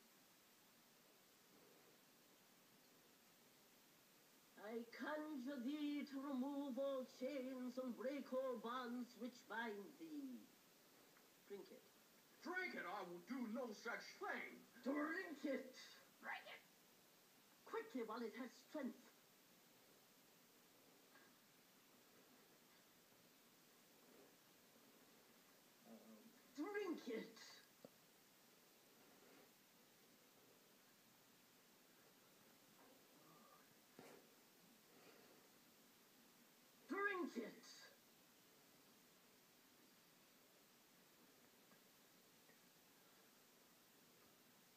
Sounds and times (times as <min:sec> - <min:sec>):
Speech: 0:04.6 - 0:10.5, 0:11.5 - 0:16.7, 0:17.6 - 0:19.2, 0:25.8 - 0:27.7, 0:36.9 - 0:38.0.